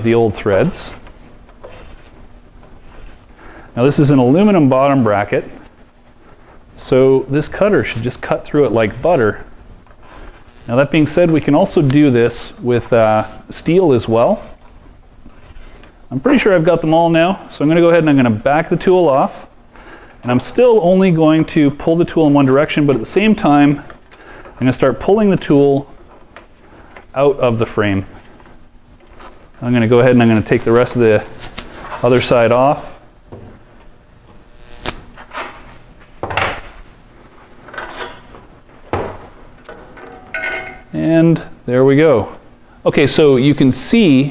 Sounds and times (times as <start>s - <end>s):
Speech: 0.0s - 1.0s, 3.8s - 5.6s, 6.8s - 9.5s, 10.7s - 14.6s, 16.1s - 19.5s, 20.2s - 23.9s, 24.6s - 25.9s, 27.1s - 28.2s, 29.6s - 31.4s, 32.0s - 33.0s, 40.9s - 44.3s.